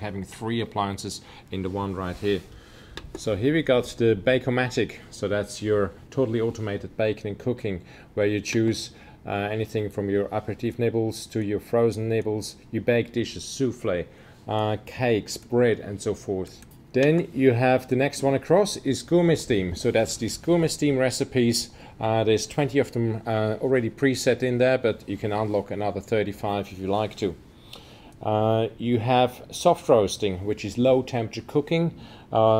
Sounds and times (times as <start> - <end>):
Speech: 0.0 - 2.5, 3.2 - 27.4, 28.2 - 32.5.